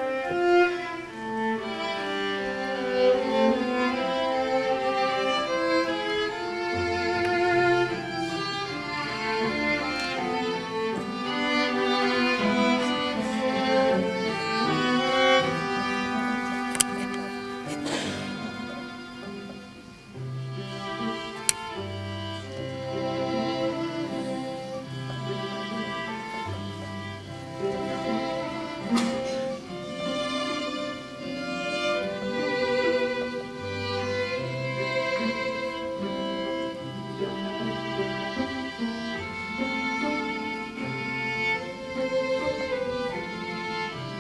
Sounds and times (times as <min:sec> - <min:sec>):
Orchestra: 0:00.0 - 0:44.2
String section: 0:00.0 - 0:44.2.